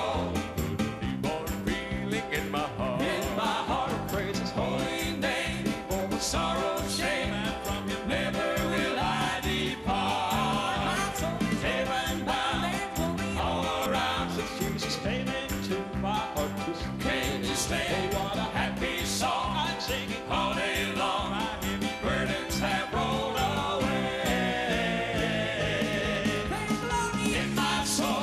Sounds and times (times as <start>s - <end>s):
Music: 0.0s - 28.2s
Male singing: 1.2s - 13.0s, 13.6s - 23.9s, 24.7s - 28.2s.